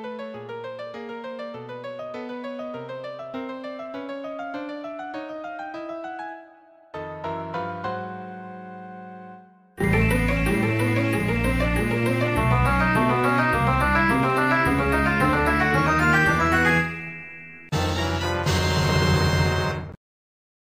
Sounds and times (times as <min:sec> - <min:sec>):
Funny music: 0:09.8 - 0:20.0.